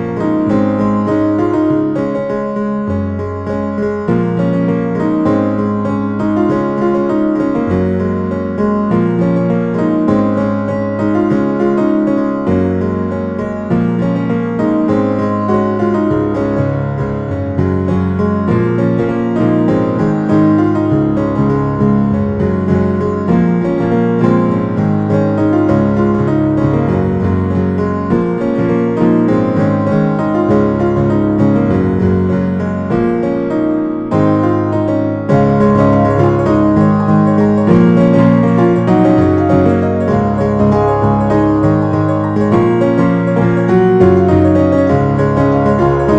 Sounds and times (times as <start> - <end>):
Music: 0.0 - 46.1.